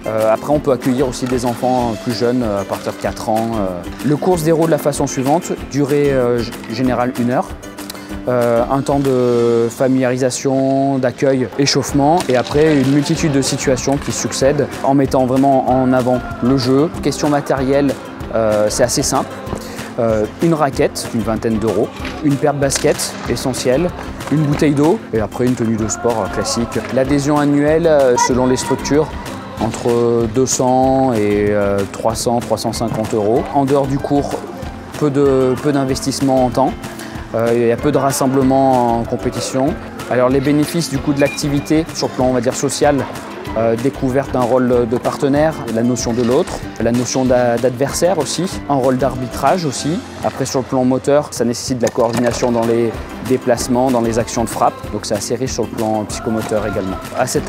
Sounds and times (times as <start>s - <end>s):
Speech: 0.0s - 7.5s, 8.3s - 19.3s, 20.0s - 57.4s
Music: 0.0s - 57.4s.